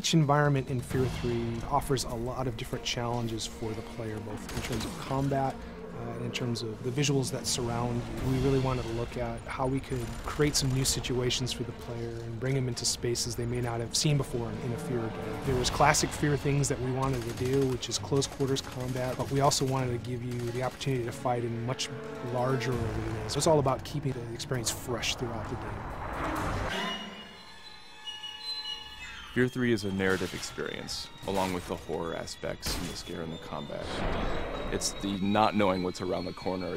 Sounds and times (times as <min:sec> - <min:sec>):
Speech: 0:00.0 - 0:25.8, 0:29.4 - 0:34.0, 0:34.7 - 0:36.7
Music: 0:00.0 - 0:36.7.